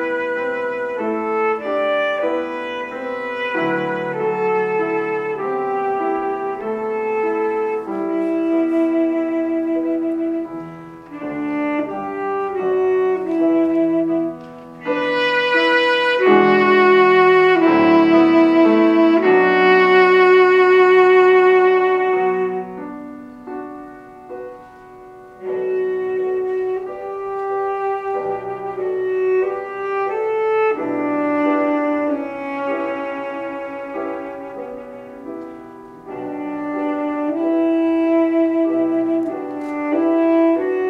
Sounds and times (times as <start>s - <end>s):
Saxophone: 0.0s - 23.7s, 24.3s - 40.8s
Brass instrument: 0.0s - 40.8s.